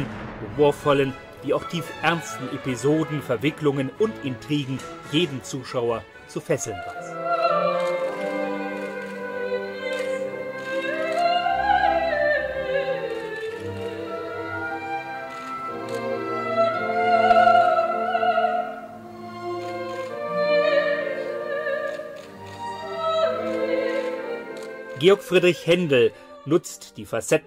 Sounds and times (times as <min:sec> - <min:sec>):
Opera: 0:00.0 - 0:27.4
Speech: 0:00.4 - 0:06.8, 0:25.0 - 0:27.4.